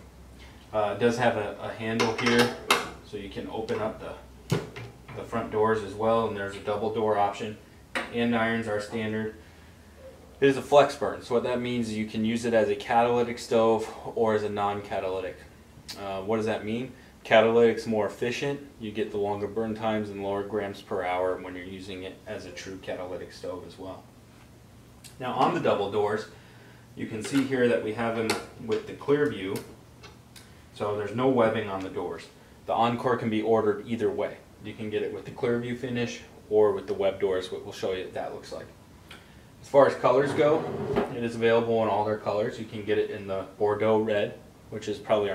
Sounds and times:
Speech: 0.7 - 4.3, 5.1 - 9.4, 10.4 - 24.1, 25.1 - 26.3, 27.0 - 29.8, 30.8 - 38.8, 39.6 - 45.3.

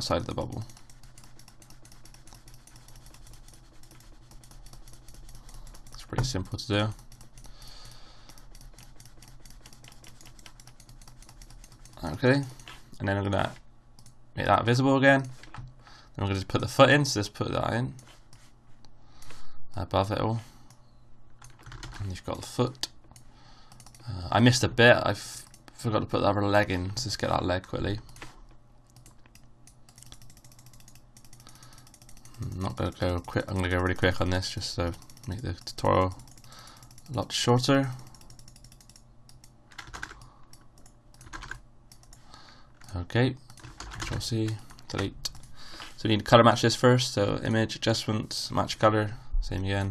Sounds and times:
Speech: 0.0 - 0.7, 6.0 - 7.0, 12.0 - 13.6, 14.4 - 15.3, 16.2 - 18.0, 19.8 - 20.5, 22.0 - 22.9, 24.1 - 28.0, 32.4 - 36.2, 37.1 - 38.0, 42.9 - 43.4, 44.1 - 45.3, 46.0 - 49.9.

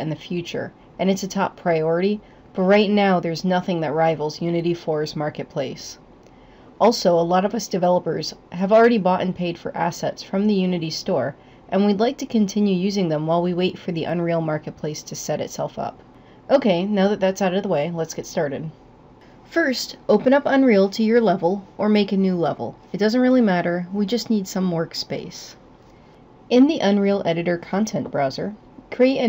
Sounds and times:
Speech: 0.0 - 6.0, 6.8 - 18.8, 19.5 - 25.6, 26.5 - 29.2.

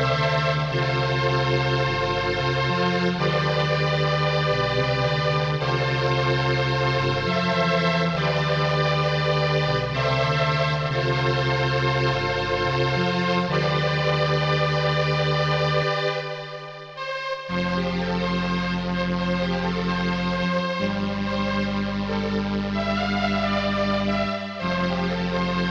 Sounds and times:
Music: 0.0 - 25.7.

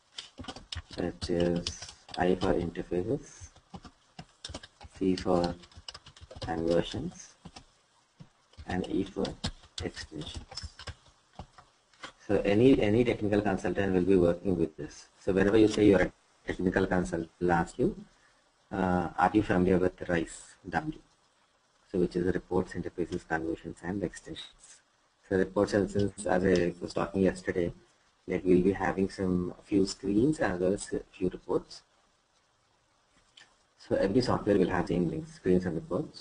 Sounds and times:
Speech: 0.9 - 3.5, 5.0 - 5.6, 6.4 - 7.4, 8.6 - 10.7, 12.2 - 18.1, 18.7 - 21.0, 21.9 - 31.9, 33.8 - 36.2.

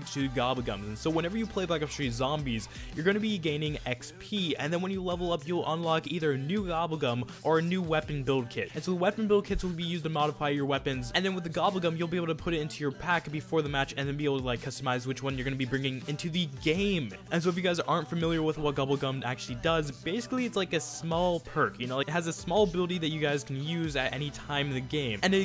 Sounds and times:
Music: 0.0 - 25.4
Speech: 0.0 - 25.4.

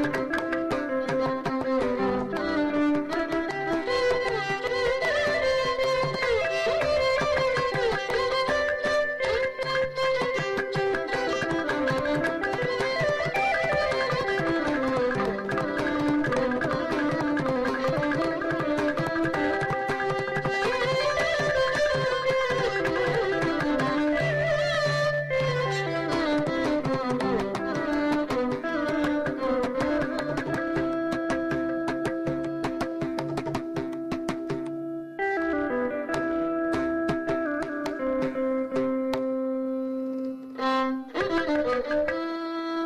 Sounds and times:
Carnatic music: 0.0 - 42.8
Classical music: 0.0 - 42.8
Musical instrument: 0.0 - 42.8
Traditional music: 0.0 - 42.8.

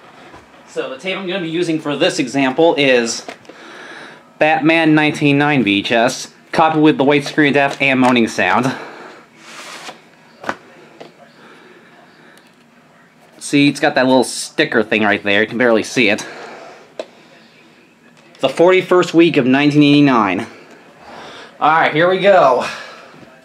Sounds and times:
Speech: 0.7 - 3.3, 4.3 - 9.0, 10.3 - 20.6, 21.5 - 23.4.

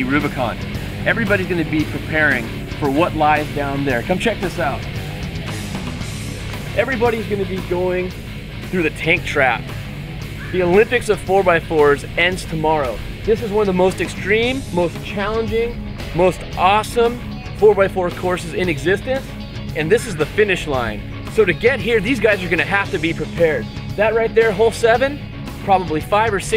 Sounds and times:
Speech: 0.0 - 4.8, 6.8 - 9.6, 10.5 - 26.5
Music: 0.0 - 26.5.

